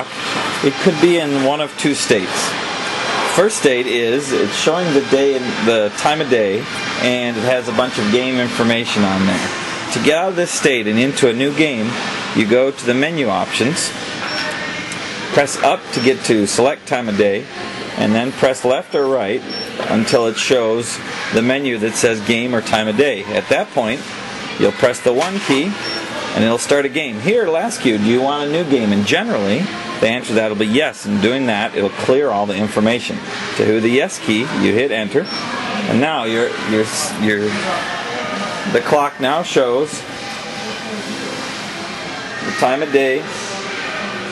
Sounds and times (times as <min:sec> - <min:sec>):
Speech: 0:00.0 - 0:02.6, 0:03.3 - 0:41.2, 0:42.4 - 0:44.3.